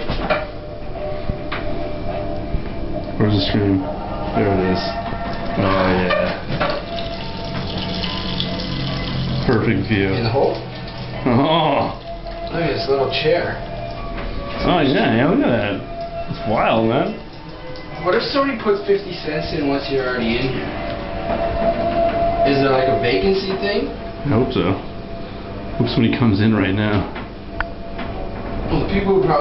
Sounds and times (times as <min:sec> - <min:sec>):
Speech: 0:03.2 - 0:05.0, 0:28.7 - 0:29.4.